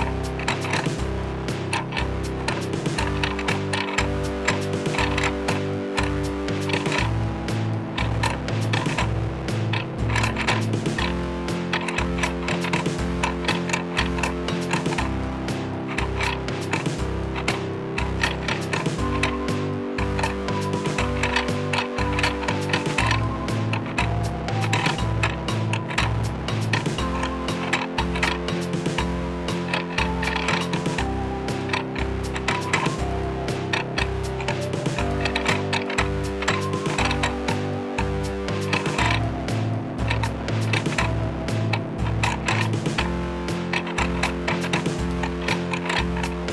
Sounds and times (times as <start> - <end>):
Music: 0.0 - 46.5
Tick-tock: 0.0 - 46.5.